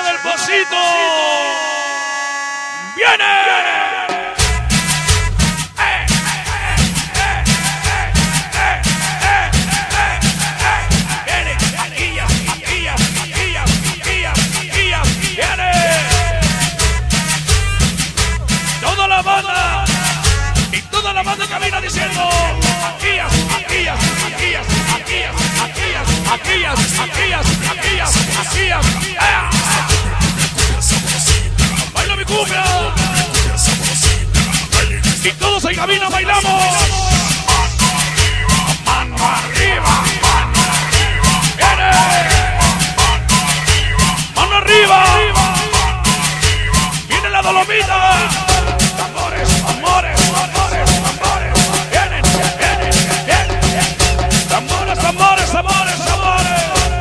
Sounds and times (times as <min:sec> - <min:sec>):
Music: 0:00.0 - 0:57.0.